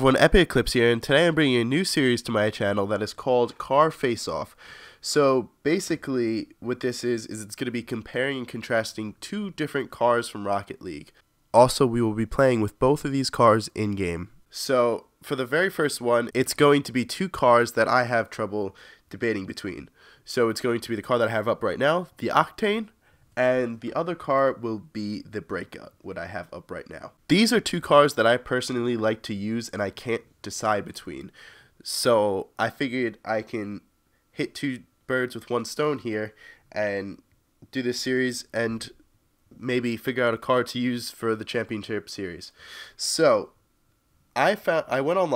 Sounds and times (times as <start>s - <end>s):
Speech: 0.0s - 39.0s, 39.6s - 43.6s, 44.4s - 45.3s.